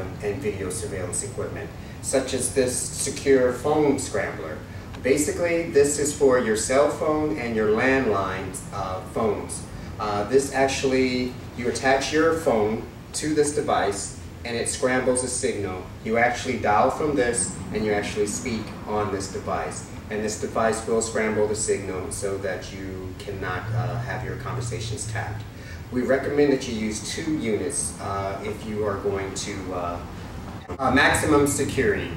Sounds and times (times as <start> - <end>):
Speech: 0.0 - 32.1.